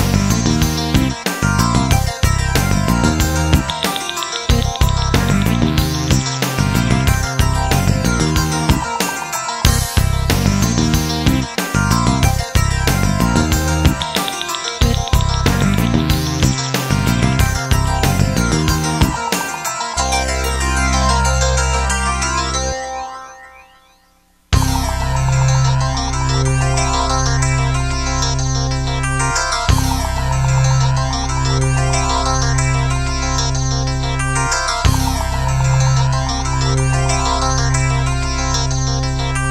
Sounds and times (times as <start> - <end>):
Music: 0.0 - 39.5.